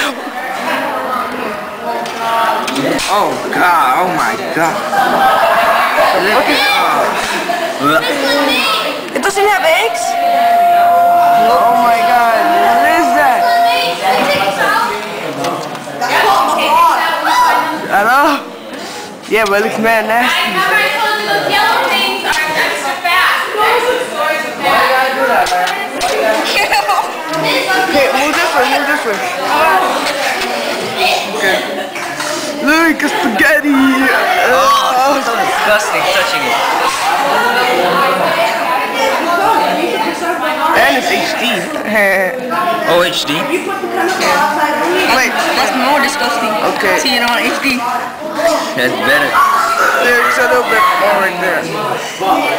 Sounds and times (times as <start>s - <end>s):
Speech: 0.0s - 18.5s.